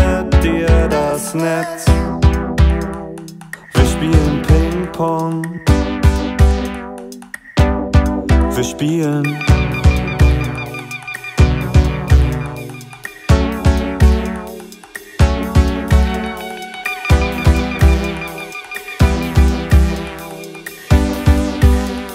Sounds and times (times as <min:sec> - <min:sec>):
Music: 0:00.0 - 0:22.1.